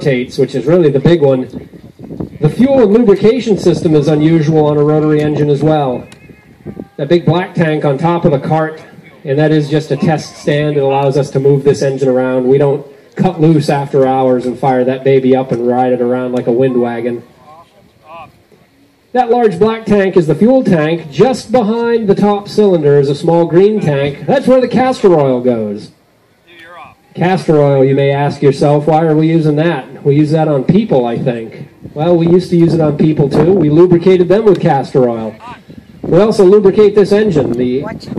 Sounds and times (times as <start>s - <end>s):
Speech: 0.0s - 1.6s, 2.4s - 6.1s, 6.8s - 18.4s, 19.1s - 25.9s, 26.5s - 38.1s.